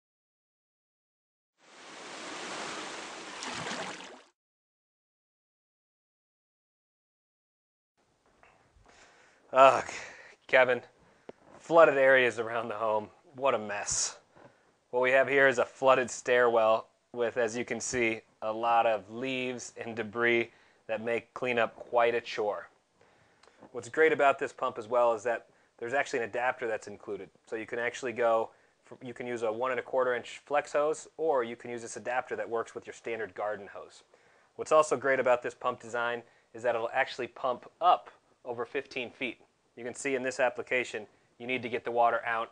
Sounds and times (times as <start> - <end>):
Speech: 9.5 - 10.9, 11.6 - 14.2, 15.0 - 22.8, 23.7 - 42.5.